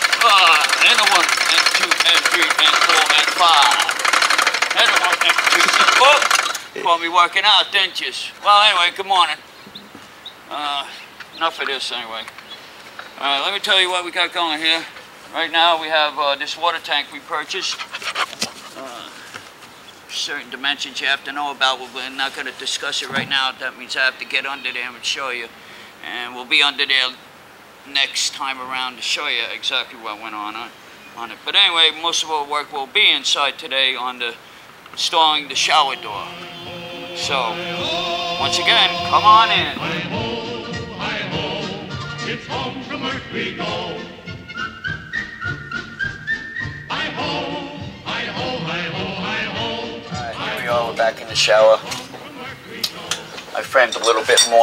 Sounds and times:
Speech: 0.2s - 4.0s, 4.8s - 6.2s, 6.8s - 9.4s, 10.5s - 12.3s, 13.2s - 17.8s, 18.8s - 19.2s, 20.1s - 27.2s, 27.8s - 34.4s, 35.0s - 36.3s, 50.2s - 52.3s, 53.5s - 54.6s
Music: 35.9s - 54.4s.

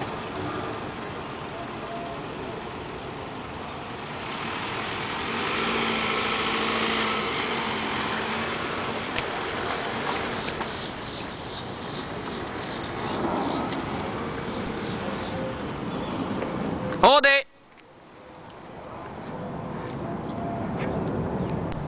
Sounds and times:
Vehicle: 0.0s - 21.8s
Speech: 17.0s - 17.5s.

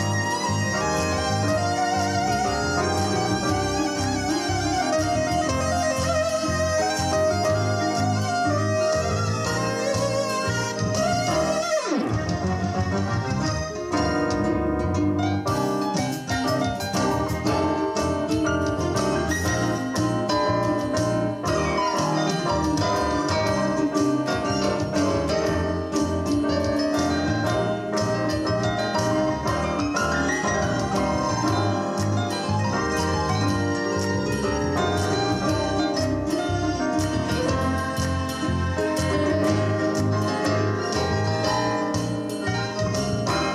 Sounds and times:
Rhythm and blues: 0.0s - 43.5s.

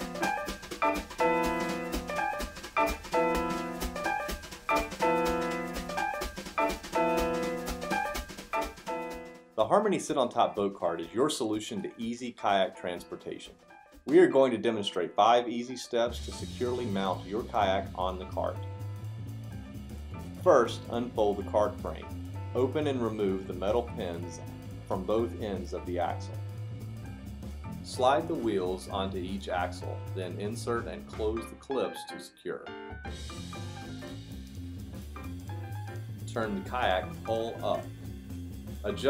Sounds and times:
Music: 0.0s - 39.1s
Speech: 9.6s - 13.5s, 14.1s - 18.6s, 20.4s - 26.4s, 27.9s - 32.7s, 36.3s - 37.9s, 38.8s - 39.1s.

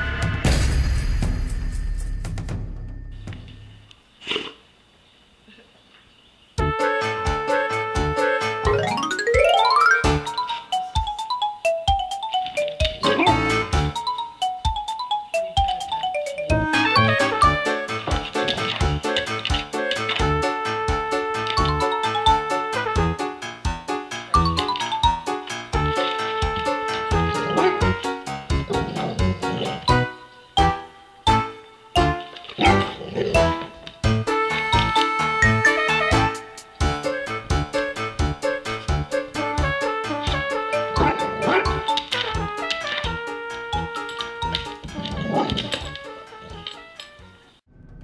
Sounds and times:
Music: 0.0s - 4.0s, 6.6s - 48.0s
Dog: 27.4s - 28.0s.

